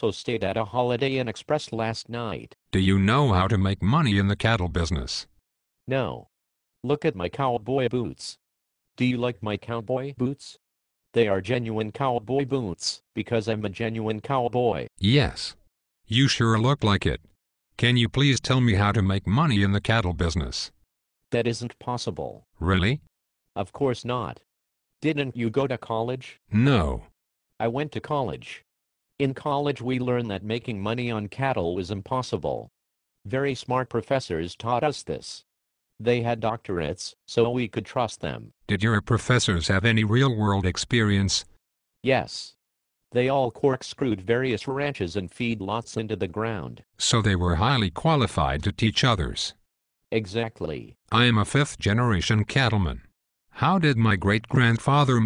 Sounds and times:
Conversation: 13.3 - 28.3, 33.2 - 43.5, 47.0 - 52.8.

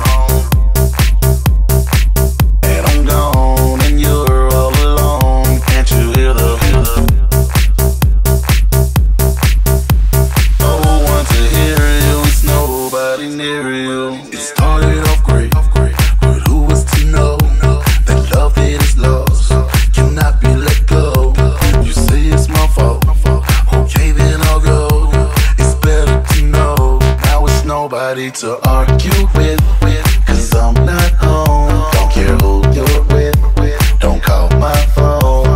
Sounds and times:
Music: 0.0 - 35.5.

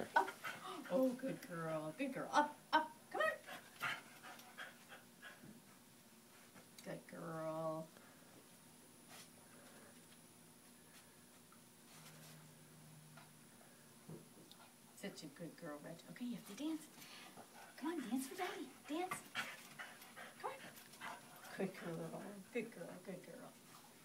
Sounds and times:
Speech: 21.5 - 23.6.

